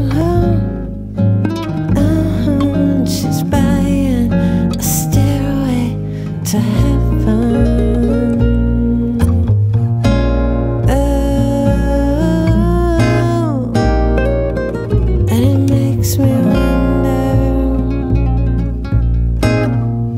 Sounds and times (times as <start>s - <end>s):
Acoustic guitar: 0.0s - 20.1s
Song: 13.8s - 20.1s
Rock music: 13.9s - 19.9s.